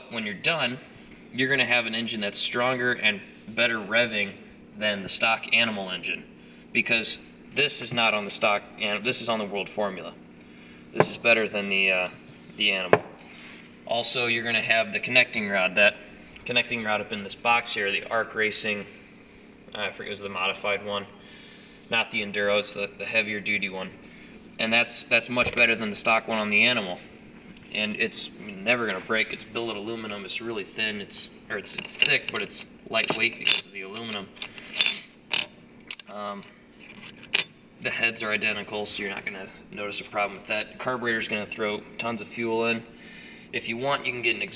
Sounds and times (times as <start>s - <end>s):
Speech: 0.0s - 10.2s, 11.0s - 13.0s, 13.9s - 18.9s, 19.7s - 21.2s, 21.9s - 24.0s, 24.6s - 27.1s, 27.7s - 34.4s, 36.1s - 36.5s, 37.8s - 42.9s, 43.6s - 44.5s.